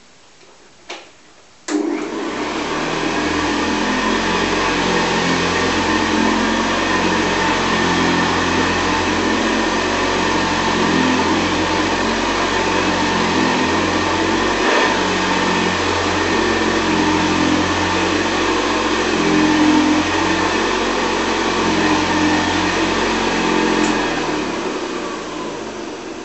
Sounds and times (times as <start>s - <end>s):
Vacuum cleaner: 1.7s - 26.2s
Medium engine (mid frequency): 2.8s - 26.2s.